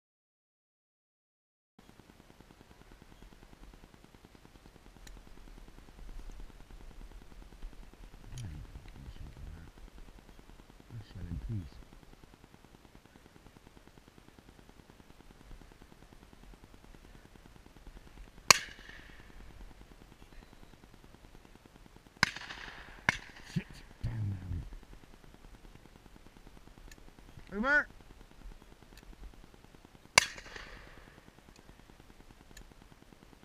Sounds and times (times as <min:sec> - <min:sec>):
Speech: 0:08.3 - 0:09.7, 0:10.9 - 0:11.8, 0:23.5 - 0:24.7, 0:27.5 - 0:27.9.